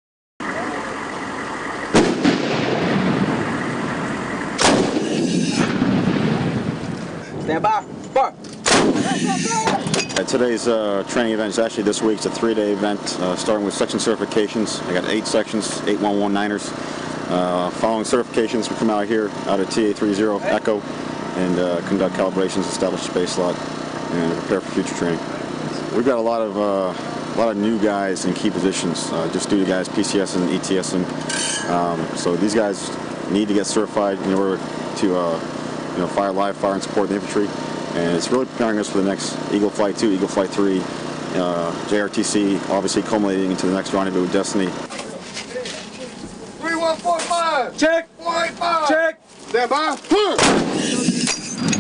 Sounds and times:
Speech: 9.6s - 16.7s, 17.3s - 20.8s, 21.4s - 31.1s, 31.7s - 35.4s, 36.0s - 50.4s.

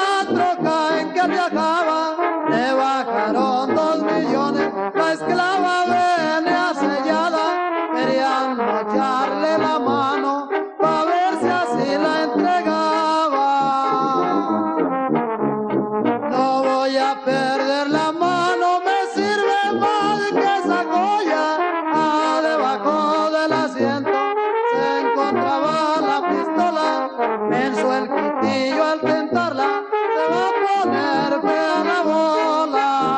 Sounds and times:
Trombone: 0.0s - 33.1s.

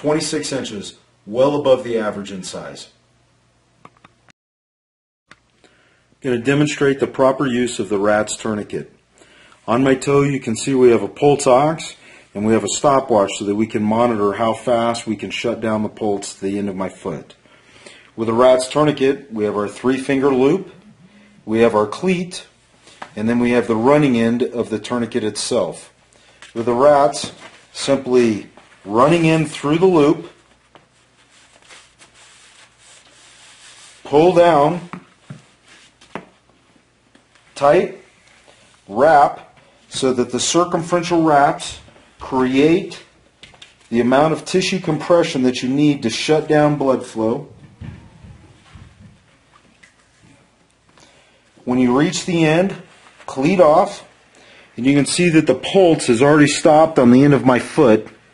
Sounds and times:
Speech: 0.0s - 3.0s, 6.2s - 9.0s, 9.7s - 17.4s, 18.2s - 20.8s, 21.4s - 22.6s, 23.2s - 30.4s, 34.0s - 35.0s, 37.6s - 38.1s, 38.9s - 43.2s, 43.9s - 47.6s, 51.6s - 54.1s, 54.8s - 58.2s.

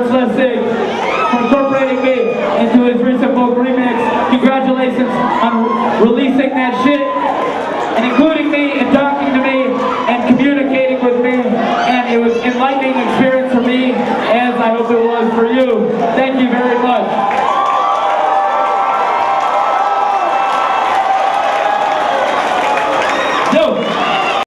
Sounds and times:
Speech: 0.0s - 0.7s, 1.3s - 7.2s, 8.0s - 17.1s.

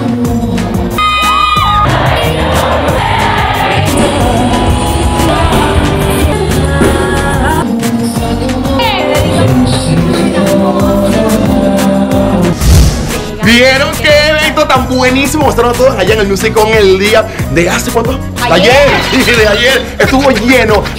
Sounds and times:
Soundtrack music: 0.0s - 20.9s.

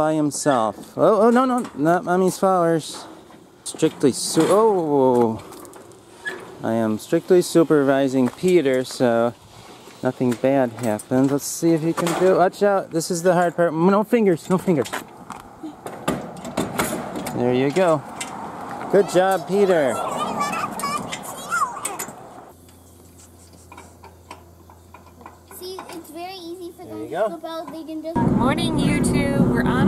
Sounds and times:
Outside, urban or manmade: 0.0s - 29.8s.

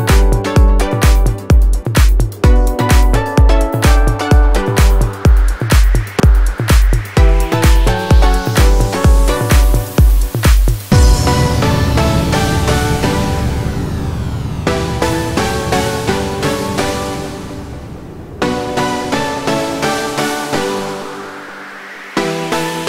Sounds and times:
Music: 0.0s - 22.8s.

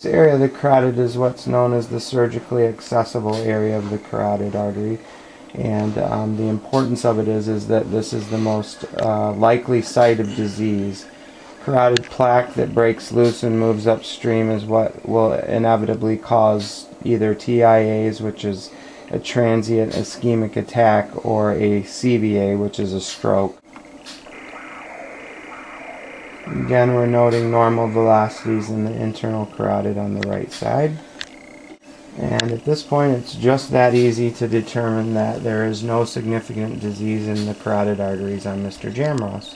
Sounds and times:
Speech: 0.0s - 23.6s, 24.7s - 31.1s, 32.2s - 39.5s
Inside, small room: 0.0s - 39.5s.

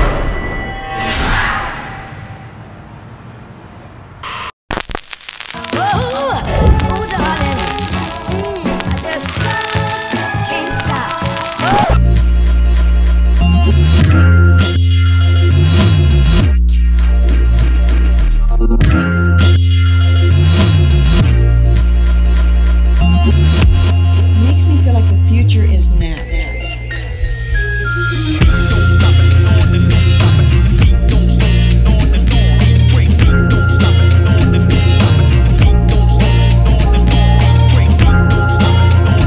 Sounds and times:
Music: 5.6s - 39.2s.

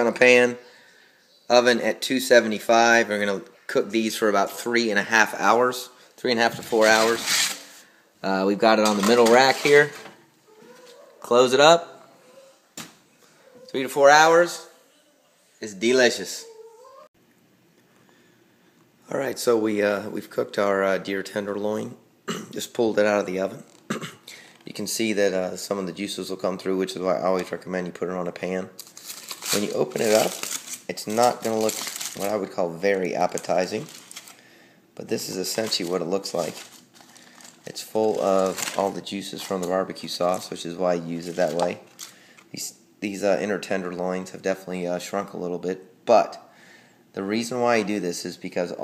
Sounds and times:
Speech: 0.0s - 0.6s, 1.5s - 7.4s, 8.2s - 10.1s, 11.2s - 12.0s, 13.7s - 14.8s, 15.6s - 16.6s, 19.0s - 23.7s, 24.7s - 28.8s, 29.5s - 33.9s, 35.0s - 36.6s, 37.6s - 41.8s, 42.6s - 46.5s, 47.2s - 48.8s
Inside, small room: 0.0s - 48.8s.

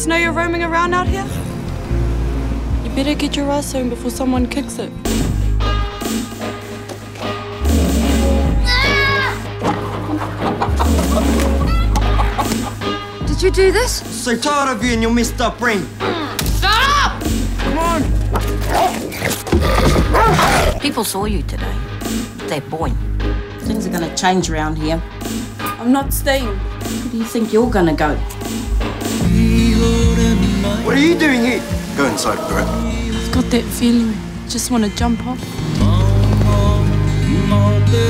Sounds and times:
Music: 0.0s - 38.0s.

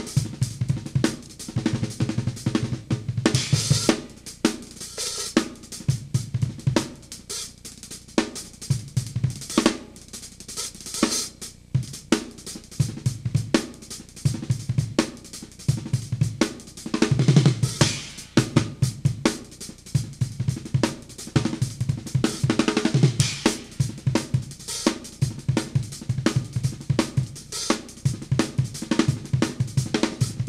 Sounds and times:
Drum kit: 0.0s - 30.4s
Snare drum: 0.0s - 30.4s.

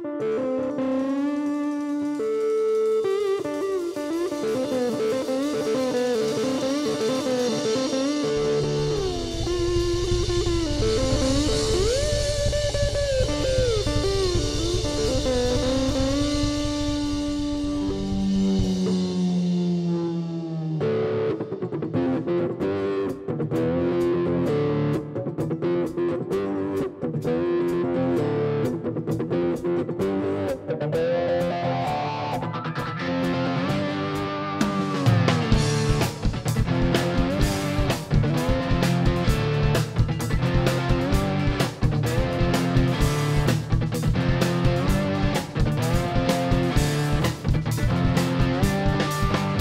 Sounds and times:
Music: 0.0s - 49.6s.

